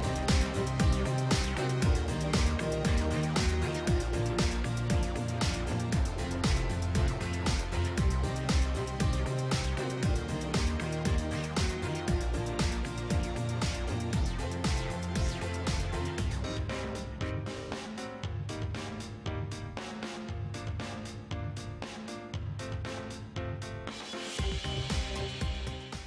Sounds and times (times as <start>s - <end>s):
Music: 0.0s - 26.0s.